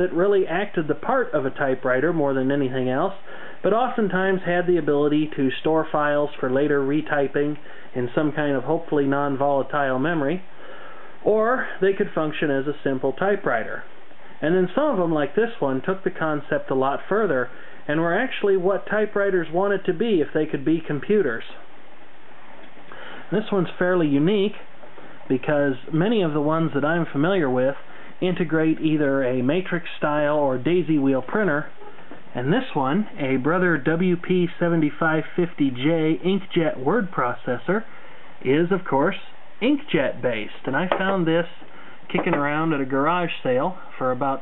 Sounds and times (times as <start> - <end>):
Speech: 0.0 - 10.5, 11.2 - 21.7, 23.3 - 24.7, 25.3 - 44.4.